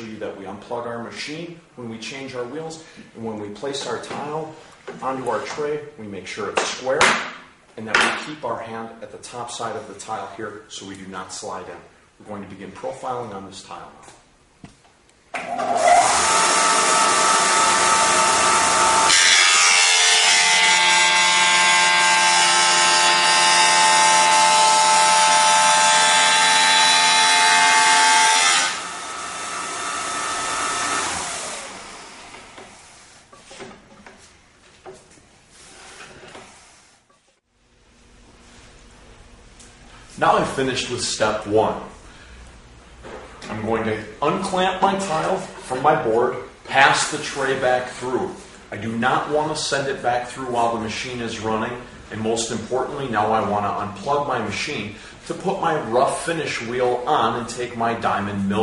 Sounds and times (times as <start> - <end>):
Speech: 0.0 - 7.2, 7.8 - 14.2, 40.2 - 42.0, 43.4 - 58.6.